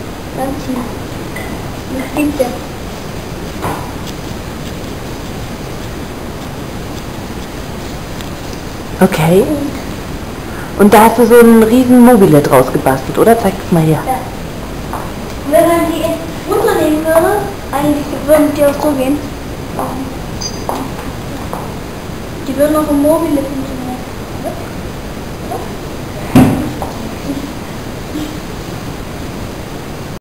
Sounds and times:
Speech: 0:01.9 - 0:02.7, 0:09.0 - 0:09.8, 0:10.8 - 0:14.3, 0:15.5 - 0:20.2, 0:22.5 - 0:24.7.

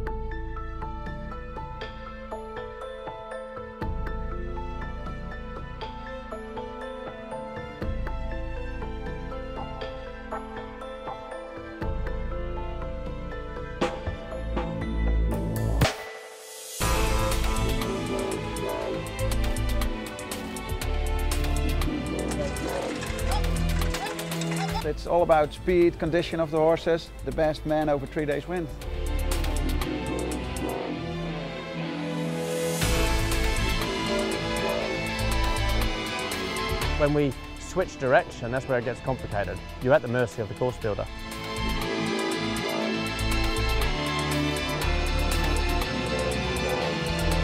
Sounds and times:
Music: 0:00.0 - 0:47.4
Speech: 0:24.6 - 0:28.7, 0:37.0 - 0:41.1.

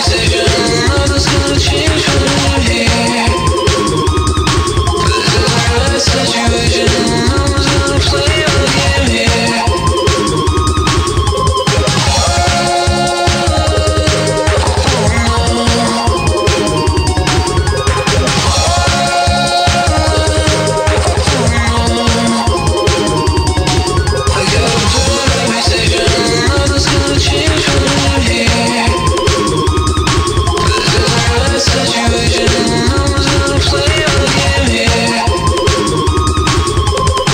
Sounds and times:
Music: 0:00.0 - 0:37.3.

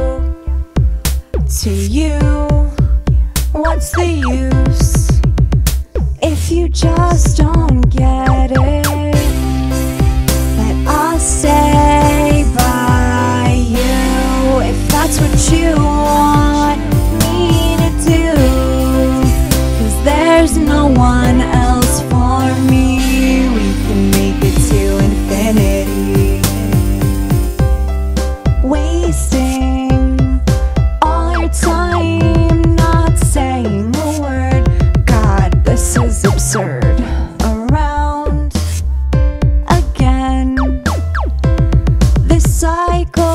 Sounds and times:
Tender music: 0:00.0 - 0:43.3.

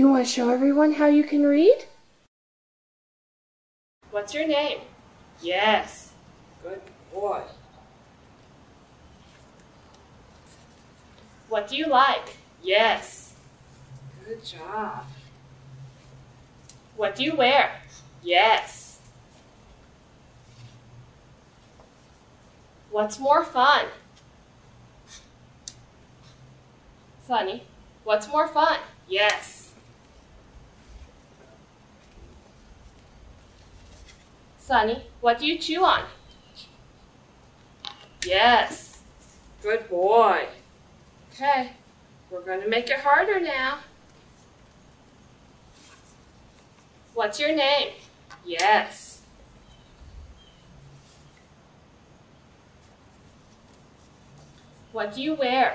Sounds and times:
Speech: 0:00.0 - 0:02.0, 0:04.1 - 0:07.6, 0:11.5 - 0:13.3, 0:14.2 - 0:15.2, 0:27.2 - 0:29.8, 0:34.6 - 0:36.2, 0:38.3 - 0:39.0, 0:39.6 - 0:40.6, 0:41.4 - 0:43.9, 0:47.2 - 0:49.3, 0:55.0 - 0:55.7.

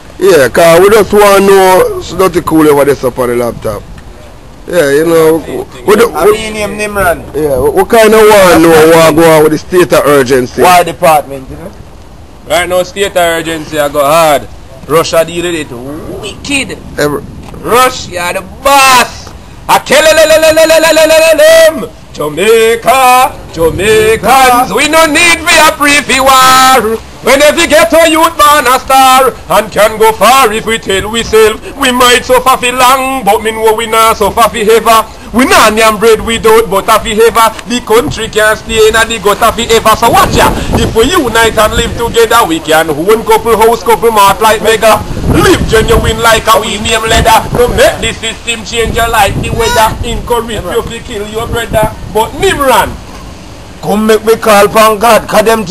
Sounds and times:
Speech: 0:00.2 - 0:03.9, 0:04.6 - 0:11.8, 0:12.5 - 0:53.0, 0:53.8 - 0:55.7.

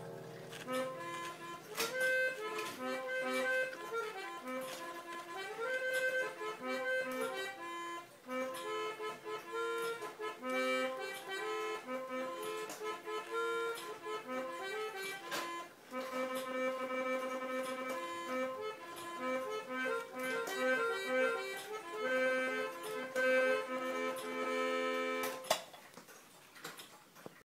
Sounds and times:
Music: 0:00.0 - 0:25.6.

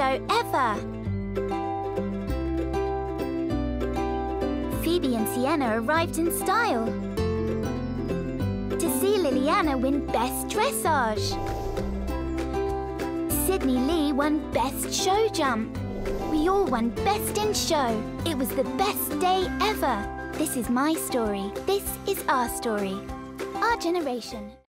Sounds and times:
Speech: 0:00.0 - 0:00.8, 0:04.8 - 0:07.0, 0:08.8 - 0:11.4, 0:13.3 - 0:15.7, 0:16.3 - 0:23.0, 0:23.6 - 0:24.6
Music: 0:00.0 - 0:24.6.

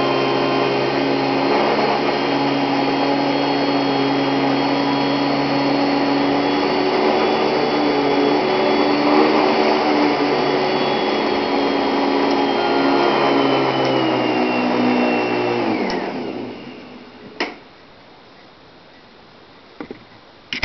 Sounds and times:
Vacuum cleaner: 0:00.0 - 0:17.6.

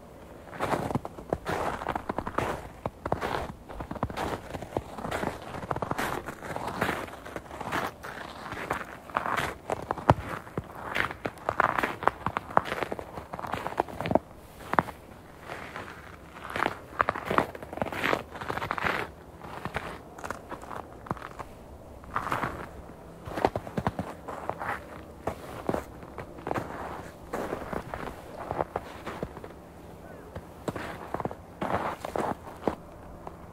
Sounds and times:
Crackle: 0:00.2 - 0:29.4.

